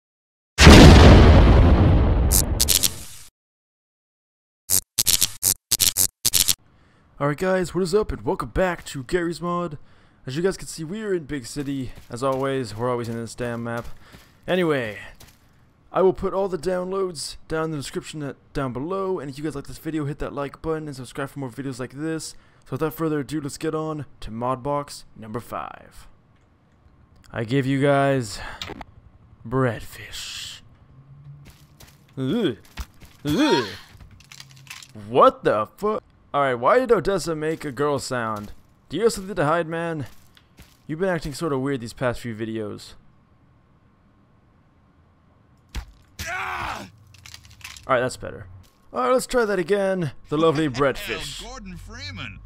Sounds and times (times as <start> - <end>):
Speech: 7.2 - 13.9, 14.5 - 15.2, 16.0 - 26.1, 29.5 - 30.6, 47.9 - 52.4.